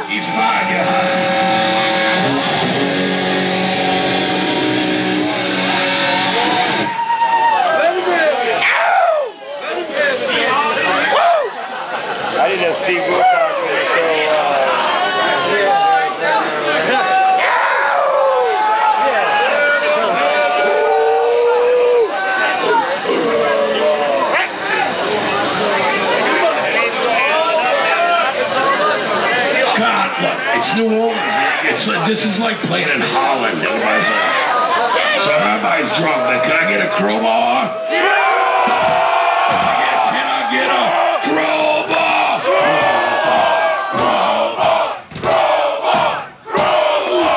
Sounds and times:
Speech: 22.5 - 37.8, 39.8 - 44.4.

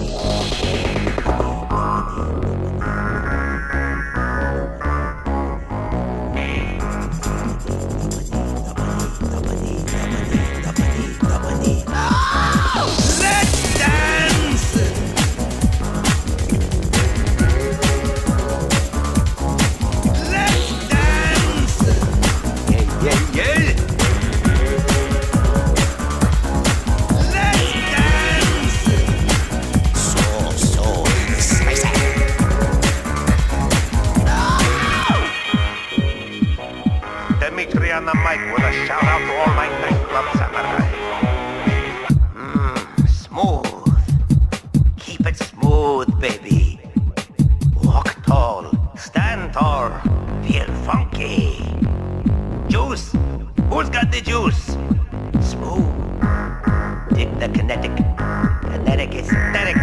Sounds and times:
Rhythm and blues: 0.0 - 59.8.

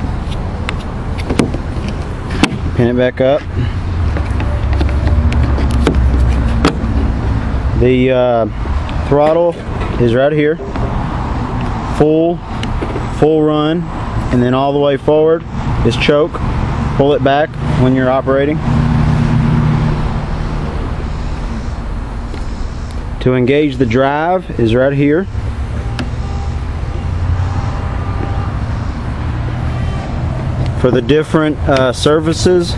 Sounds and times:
Speech: 2.8 - 3.4, 7.8 - 8.5, 9.1 - 10.6, 12.0 - 12.4, 13.2 - 16.4, 17.0 - 18.6, 23.2 - 25.3, 30.8 - 32.7.

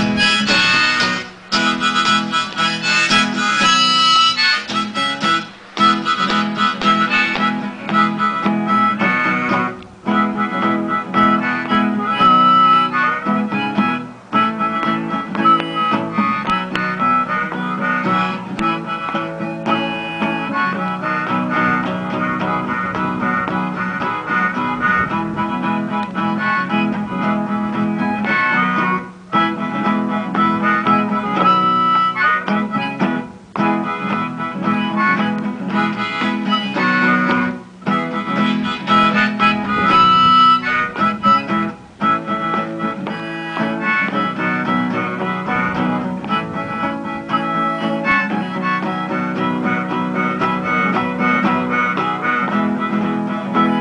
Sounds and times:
Funny music: 0.0 - 53.8.

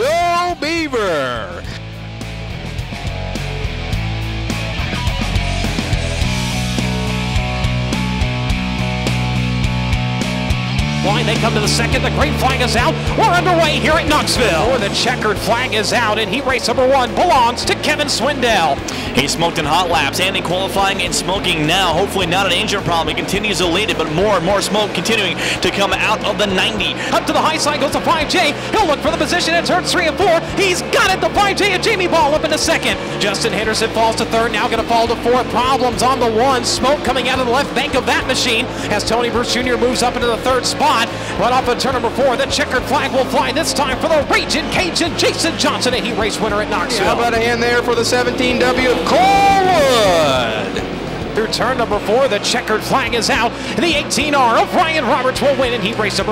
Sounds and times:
Speech: 0.0 - 1.8, 11.0 - 56.3.

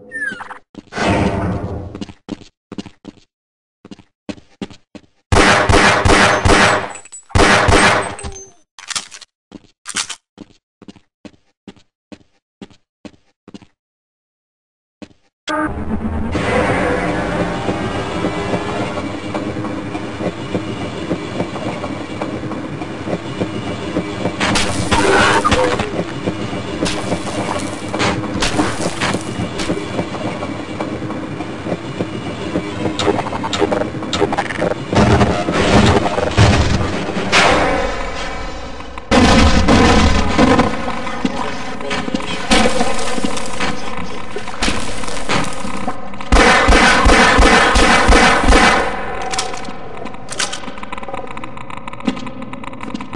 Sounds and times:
Railroad car, train wagon: 15.6 - 39.2, 40.0 - 53.1
Train: 16.3 - 39.1, 40.6 - 53.1.

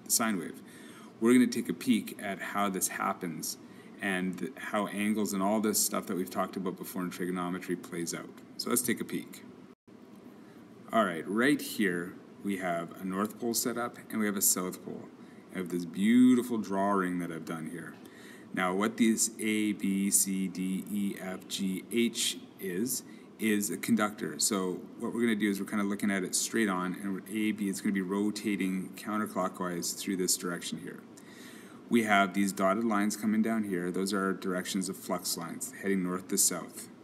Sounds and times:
Narration, monologue: 0.0 - 37.0.

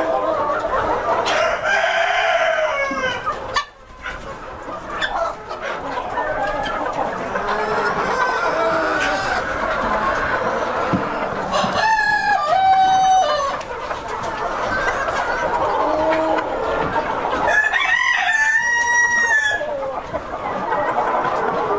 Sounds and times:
Cluck: 0.0 - 1.8, 2.7 - 21.7
Crowing, cock-a-doodle-doo: 1.4 - 3.2, 17.5 - 19.6.

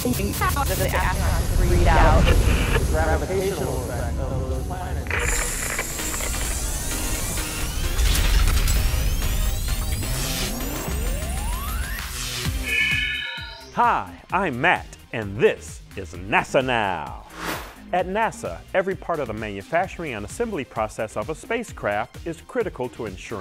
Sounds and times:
Speech: 0.0 - 5.1, 13.8 - 17.2, 17.9 - 23.4
Music: 0.0 - 23.4.

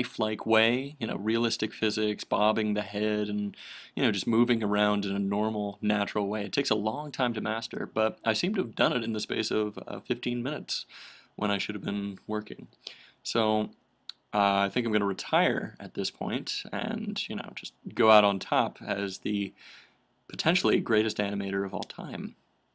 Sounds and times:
Speech: 0.0 - 19.6, 20.3 - 22.4.

